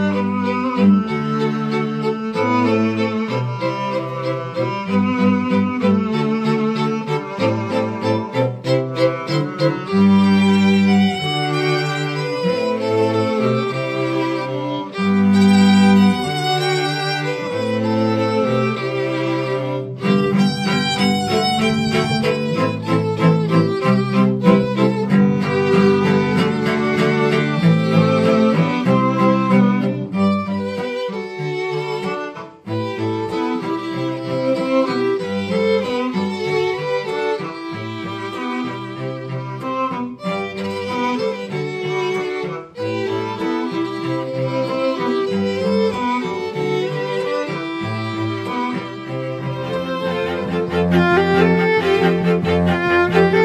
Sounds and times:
Cello: 0:00.0 - 0:53.4.

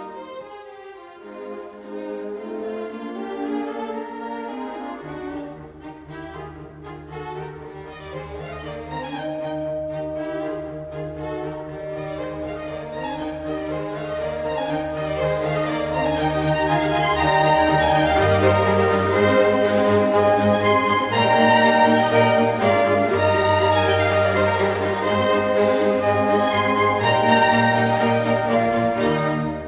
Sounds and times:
Bowed string instrument: 0:00.0 - 0:29.6
French horn: 0:00.0 - 0:29.6.

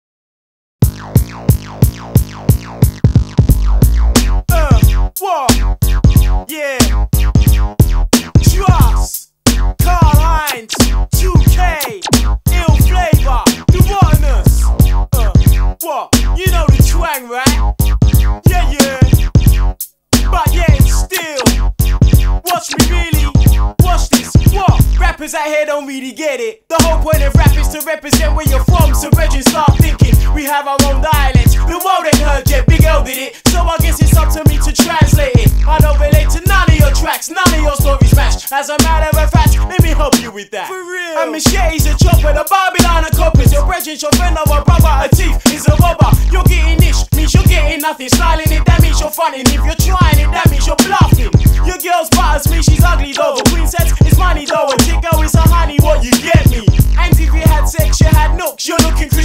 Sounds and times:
Drum machine: 0:00.8 - 0:25.4, 0:26.7 - 0:40.4, 0:41.4 - 0:59.2
Hip hop music: 0:00.8 - 0:59.2.

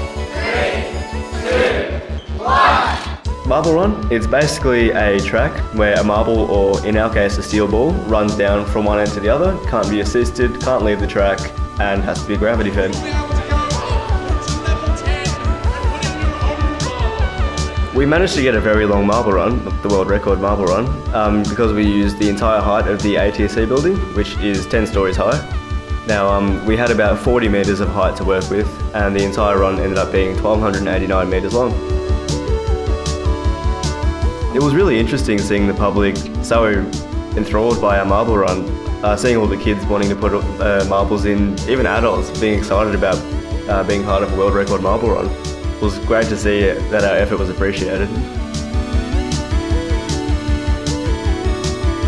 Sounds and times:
Music: 0:00.0 - 0:52.0
Speech: 0:03.5 - 0:17.1, 0:17.9 - 0:25.5, 0:26.1 - 0:31.8, 0:34.5 - 0:48.3.

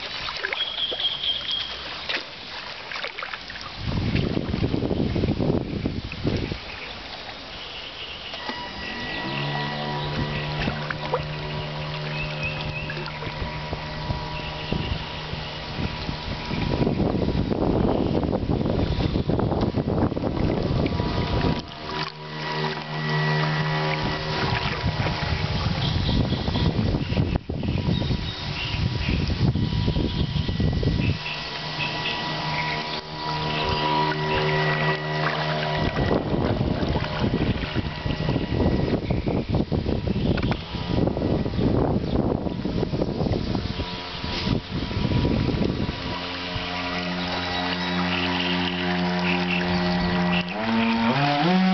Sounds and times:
Motorboat, speedboat: 0:00.0 - 0:51.7.

